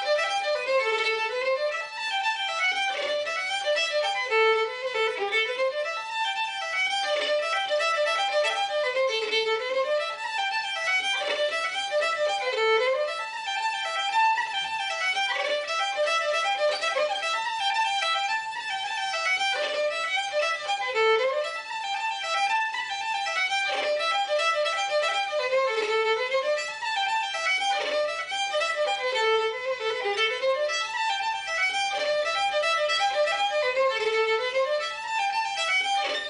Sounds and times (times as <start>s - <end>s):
Violin, fiddle: 0.0s - 36.3s.